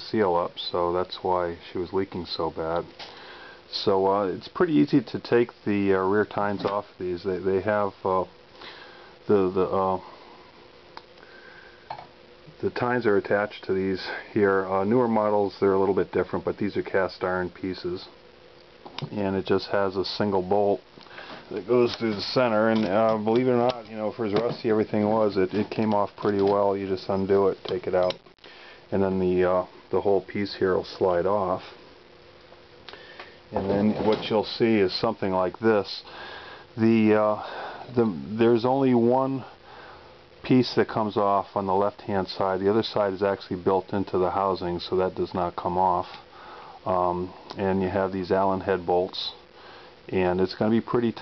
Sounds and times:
Speech: 0:00.0 - 0:02.9, 0:03.7 - 0:08.3, 0:09.3 - 0:10.1, 0:12.6 - 0:18.2, 0:19.0 - 0:20.8, 0:21.5 - 0:28.2, 0:28.9 - 0:31.8, 0:33.5 - 0:36.1, 0:36.8 - 0:39.5, 0:40.4 - 0:46.2, 0:46.8 - 0:49.4, 0:50.1 - 0:51.2.

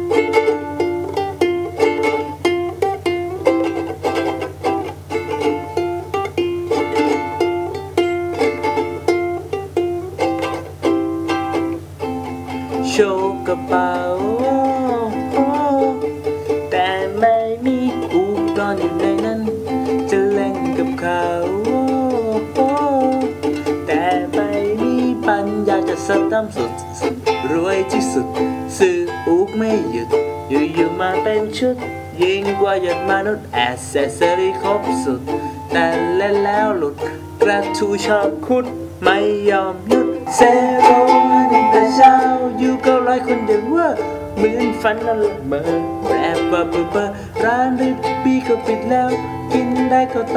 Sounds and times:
Ukulele: 0:00.0 - 0:50.3.

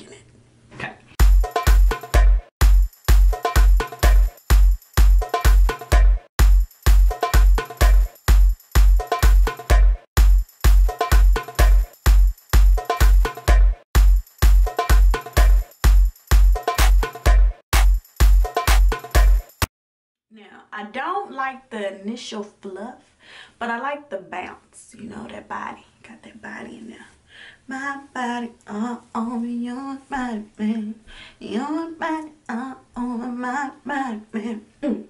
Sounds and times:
Speech: 0:00.0 - 0:01.0, 0:20.3 - 0:27.2, 0:33.0 - 0:35.1
Inside, small room: 0:20.3 - 0:35.1.

